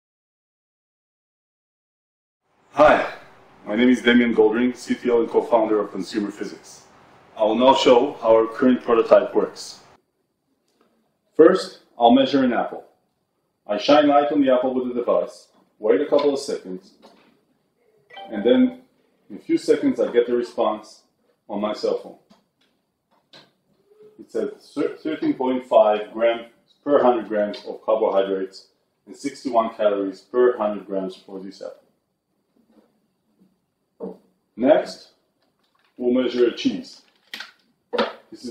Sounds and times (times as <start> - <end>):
Inside, small room: 2.4 - 38.5
Speech: 2.8 - 9.8, 11.4 - 12.9, 13.7 - 17.1, 18.2 - 22.3, 24.1 - 31.8, 34.6 - 35.2, 36.0 - 37.1, 38.2 - 38.5.